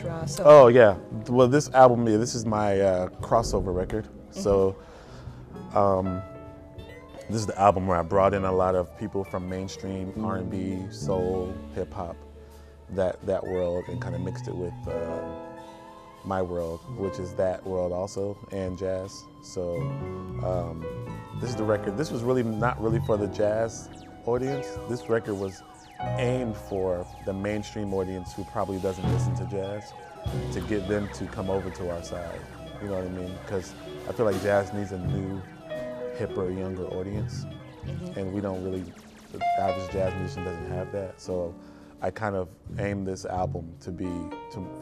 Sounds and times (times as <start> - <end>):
Speech: 0.0 - 4.8, 5.7 - 6.2, 7.3 - 12.2, 12.9 - 15.2, 16.3 - 35.4, 36.2 - 44.8
Music: 0.0 - 44.8.